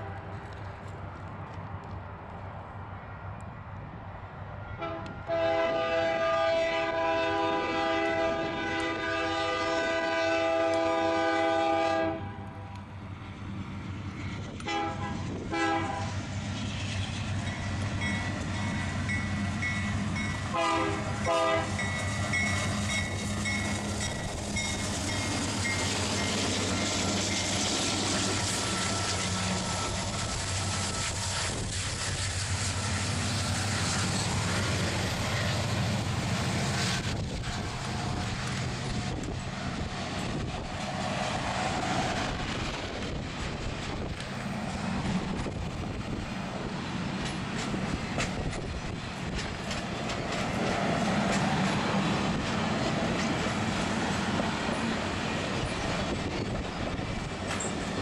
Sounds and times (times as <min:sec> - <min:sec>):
Railroad car, train wagon: 0:00.0 - 0:58.0
Train whistle: 0:04.8 - 0:12.8, 0:14.6 - 0:16.2, 0:20.5 - 0:21.9.